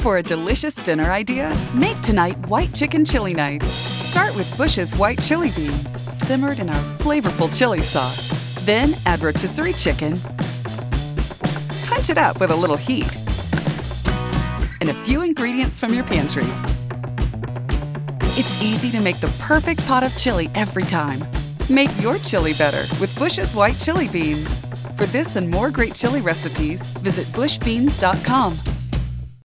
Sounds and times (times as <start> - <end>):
Speech: 0.0 - 10.2, 11.8 - 13.2, 14.8 - 16.6, 18.4 - 28.6
Music: 0.0 - 29.4.